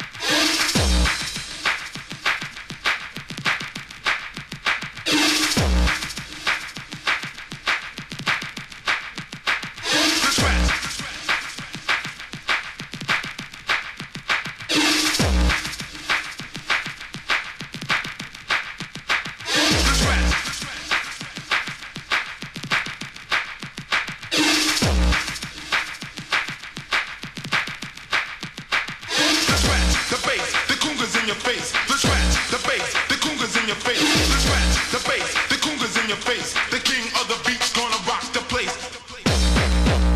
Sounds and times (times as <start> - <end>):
Techno: 0.0 - 40.1.